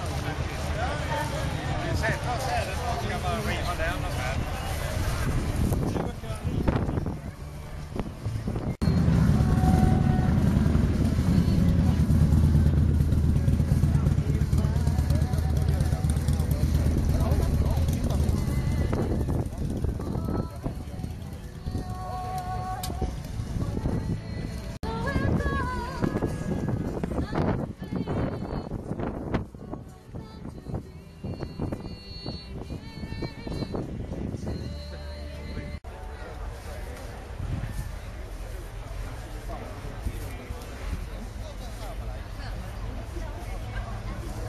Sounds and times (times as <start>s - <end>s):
Speech: 0.0s - 7.5s, 13.4s - 23.1s, 34.8s - 44.4s
Vehicle: 0.0s - 44.4s
Music: 14.5s - 37.0s.